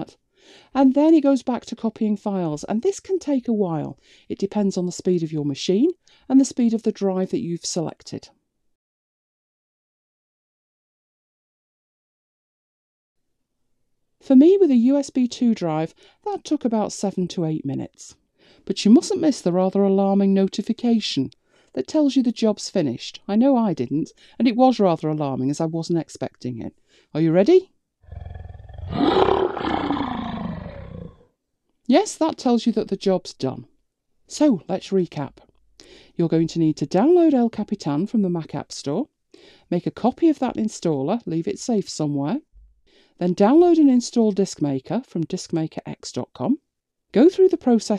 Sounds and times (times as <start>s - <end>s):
Speech: 0.8s - 8.4s, 14.2s - 27.7s, 31.9s - 33.7s, 34.3s - 35.5s, 36.2s - 39.1s, 39.7s - 42.5s, 43.2s - 46.6s, 47.2s - 47.9s
Inside, small room: 13.2s - 47.9s
Growling: 28.1s - 31.3s.